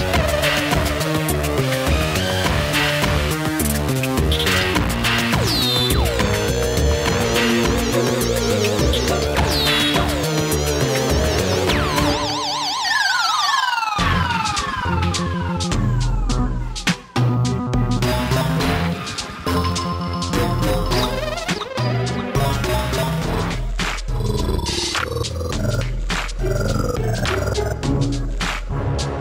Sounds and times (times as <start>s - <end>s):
Video game music: 0.0s - 29.2s.